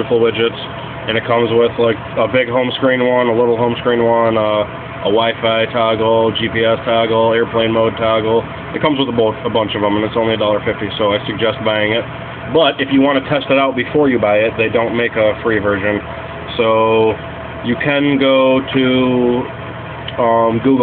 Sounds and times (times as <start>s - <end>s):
Speech: 0.0s - 19.5s, 20.1s - 20.8s.